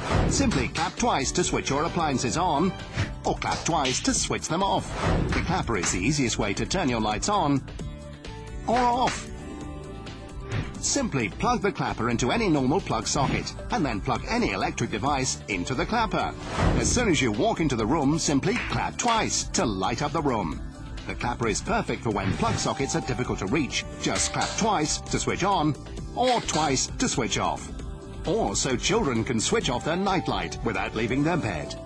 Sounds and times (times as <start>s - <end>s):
Music: 0.0s - 31.8s
Speech: 0.4s - 4.8s, 5.4s - 7.6s, 8.7s - 9.2s, 10.8s - 27.7s, 28.3s - 31.8s.